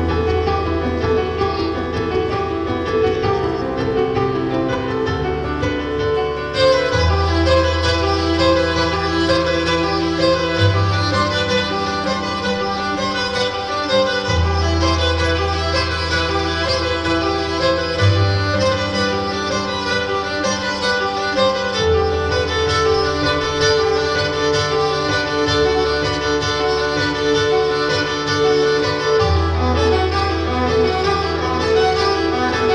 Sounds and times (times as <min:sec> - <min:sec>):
Violin, fiddle: 0:00.0 - 0:32.7.